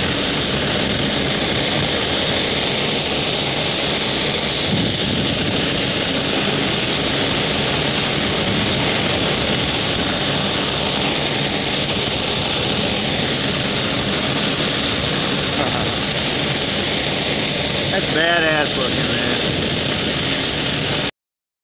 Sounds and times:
Fixed-wing aircraft, airplane: 0.0 - 21.1
Speech: 17.9 - 19.5.

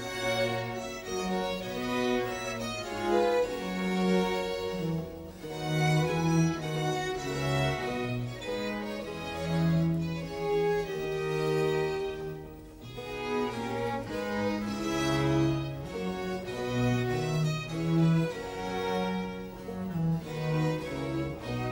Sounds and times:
Music: 0.0 - 21.7.

